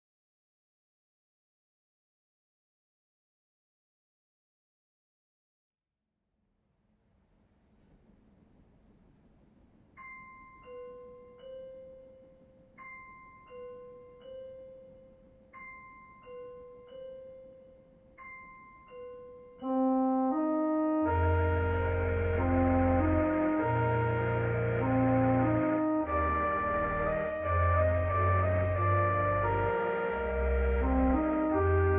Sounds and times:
Ambient music: 10.6 - 31.9.

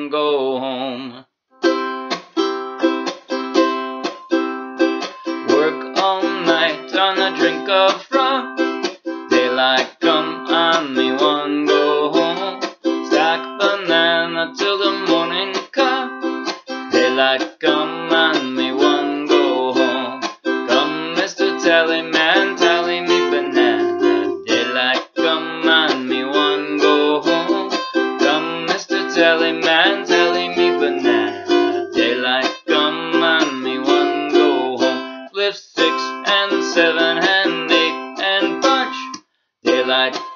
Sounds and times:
Speech: 0.0 - 1.2
Music: 1.6 - 40.3.

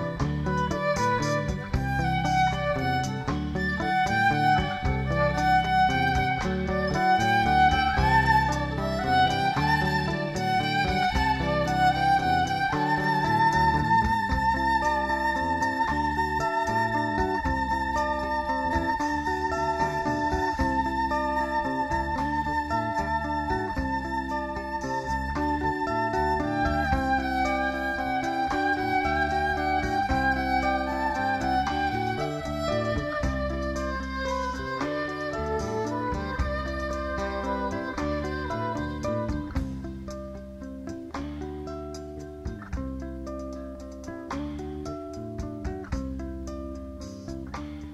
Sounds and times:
Guitar: 0.0 - 47.9.

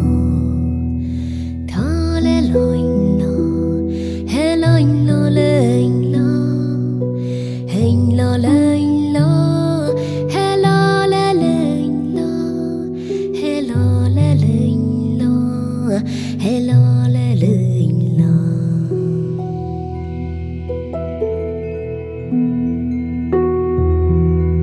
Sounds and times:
Music: 0.0 - 24.6.

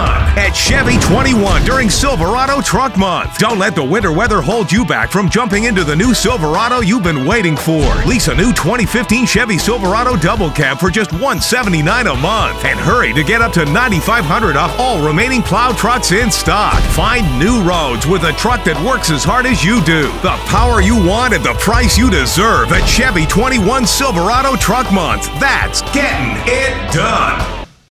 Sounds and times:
Speech: 0.0 - 27.6
Music: 0.0 - 27.9.

